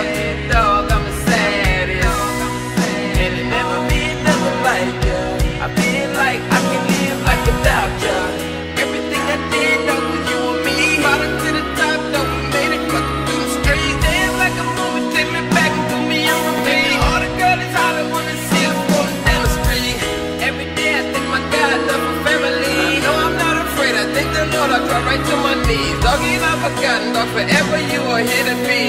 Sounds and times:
Music: 0:00.0 - 0:28.8.

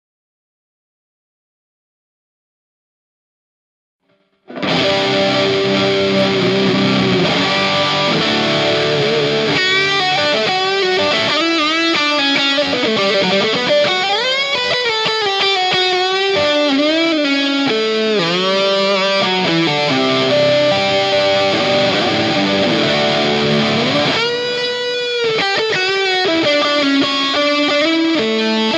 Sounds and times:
Electric guitar: 0:04.2 - 0:28.7.

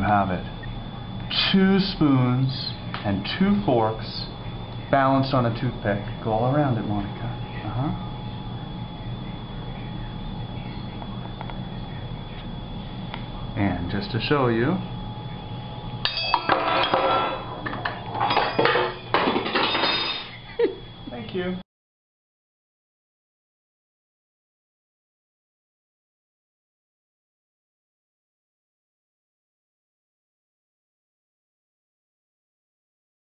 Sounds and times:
Speech: 0:00.0 - 0:00.6, 0:01.2 - 0:12.6, 0:13.2 - 0:15.0, 0:21.1 - 0:21.6.

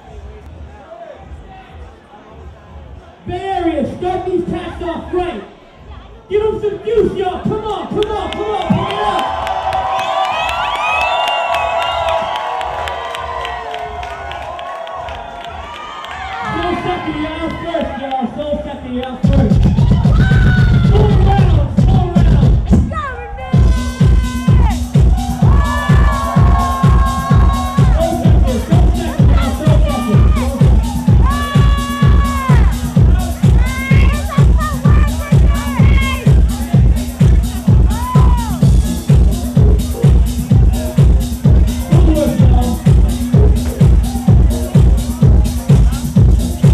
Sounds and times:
Music: 0:07.4 - 0:46.7.

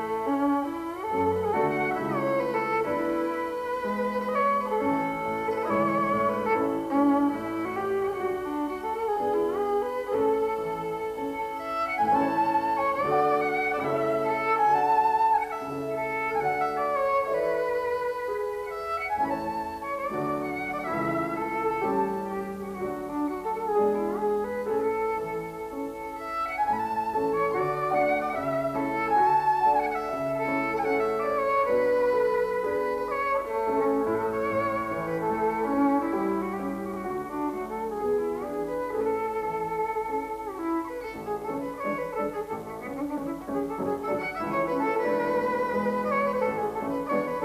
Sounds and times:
Violin, fiddle: 0:00.0 - 0:47.4.

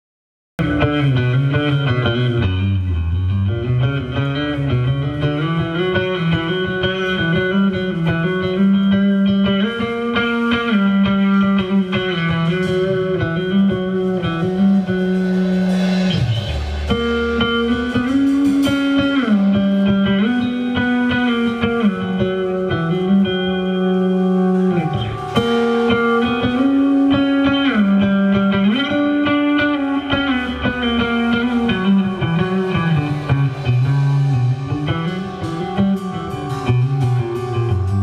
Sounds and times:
Tapping (guitar technique): 0:03.7 - 0:38.0.

